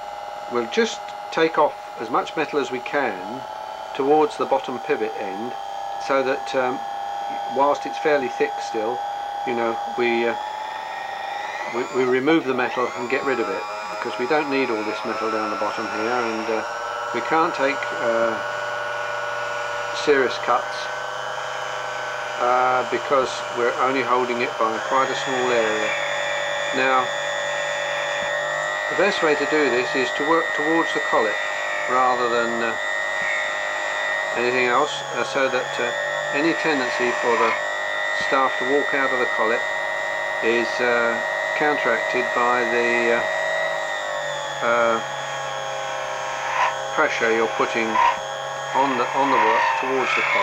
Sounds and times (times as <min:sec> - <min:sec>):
Speech: 0:00.5 - 0:03.4, 0:04.0 - 0:10.4, 0:11.7 - 0:16.6, 0:17.2 - 0:18.4, 0:20.0 - 0:20.9, 0:22.4 - 0:26.0, 0:26.7 - 0:27.1, 0:28.9 - 0:32.8, 0:34.4 - 0:37.6, 0:38.2 - 0:39.6, 0:40.4 - 0:43.3, 0:44.6 - 0:45.1, 0:46.9 - 0:48.2, 0:48.8 - 0:50.4.